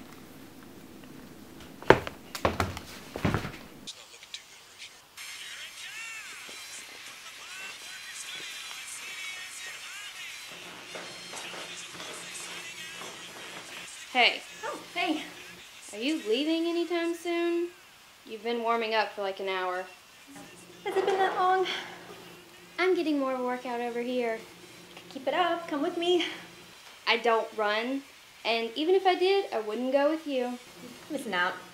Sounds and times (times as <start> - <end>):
Music: 3.9 - 17.9, 19.7 - 26.7
Speech: 14.1 - 21.9, 22.8 - 24.5, 25.1 - 26.4, 27.1 - 31.7.